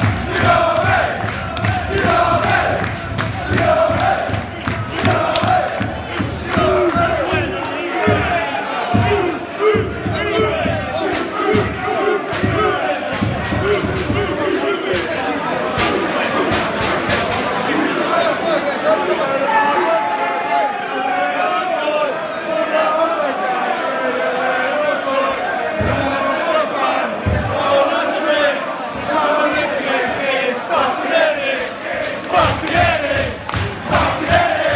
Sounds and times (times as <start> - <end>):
Choir: 0.0 - 18.5, 19.8 - 34.7.